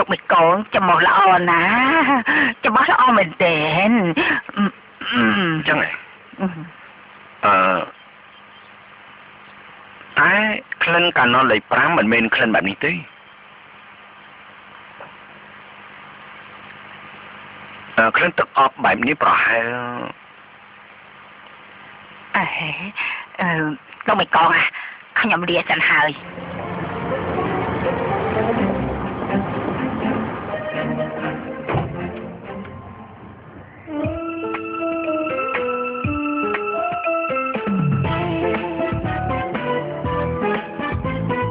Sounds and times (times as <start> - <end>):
Speech: 0.0 - 6.7, 10.2 - 13.1, 18.0 - 20.2, 22.4 - 26.2.